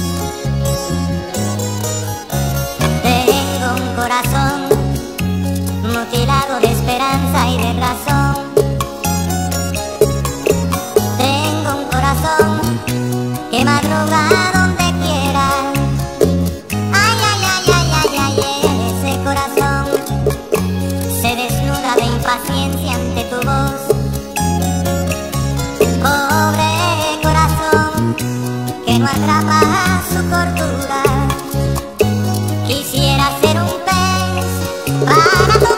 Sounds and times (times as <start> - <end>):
Music: 0.0 - 35.7.